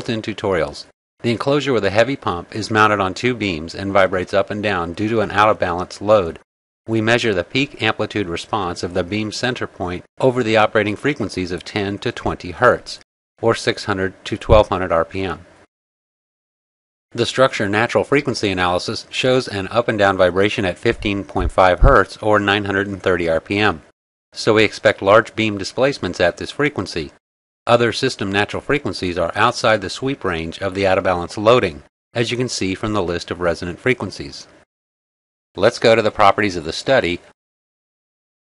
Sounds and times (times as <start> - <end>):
Speech: 0.0 - 15.5, 17.1 - 34.6, 35.6 - 37.4.